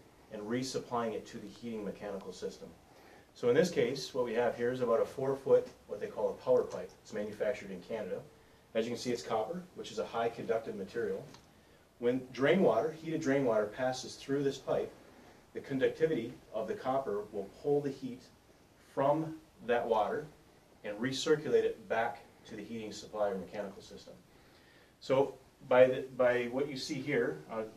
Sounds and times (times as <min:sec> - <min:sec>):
Speech: 0:00.3 - 0:02.8, 0:03.4 - 0:11.4, 0:12.0 - 0:14.9, 0:15.5 - 0:18.3, 0:18.9 - 0:24.2, 0:25.0 - 0:27.7.